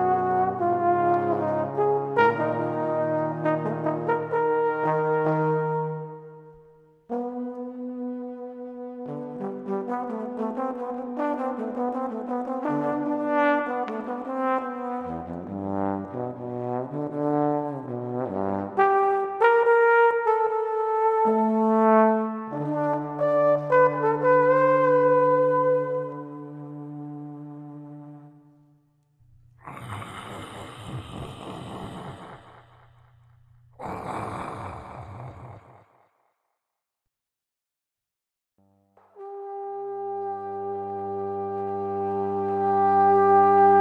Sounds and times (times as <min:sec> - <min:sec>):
Trombone: 0:00.0 - 0:06.2, 0:07.1 - 0:28.2, 0:39.2 - 0:43.8.